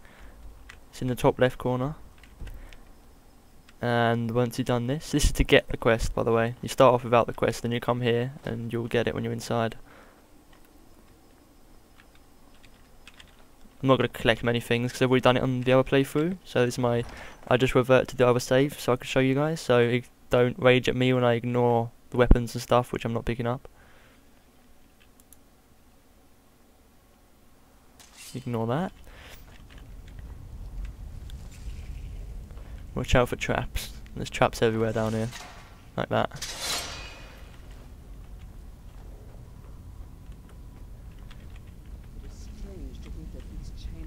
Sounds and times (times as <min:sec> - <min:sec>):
Speech: 0:00.9 - 0:02.0, 0:03.8 - 0:09.8, 0:13.8 - 0:23.6, 0:28.4 - 0:29.0, 0:33.0 - 0:35.3, 0:36.0 - 0:36.4, 0:42.2 - 0:44.0.